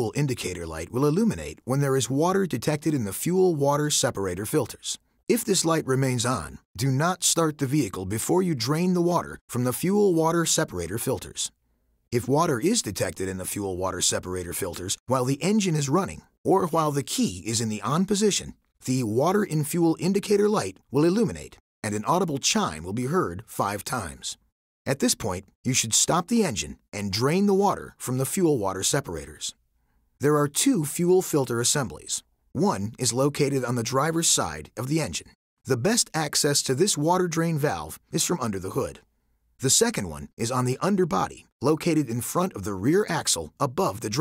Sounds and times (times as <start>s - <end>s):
Speech: 0.0s - 11.6s, 12.2s - 29.6s, 30.2s - 44.2s.